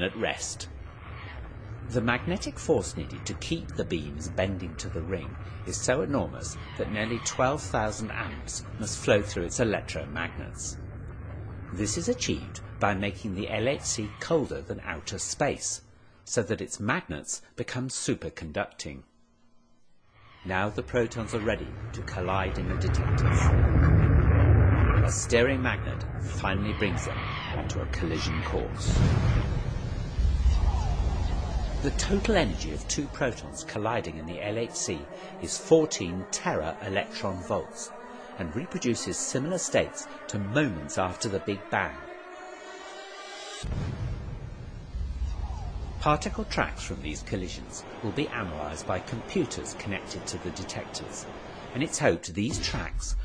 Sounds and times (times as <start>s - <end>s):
Speech: 0.0s - 0.7s, 1.9s - 10.8s, 11.7s - 19.1s, 20.5s - 23.6s, 25.0s - 29.1s, 31.8s - 42.1s, 46.0s - 53.2s
Bang: 28.8s - 32.4s, 43.6s - 46.9s.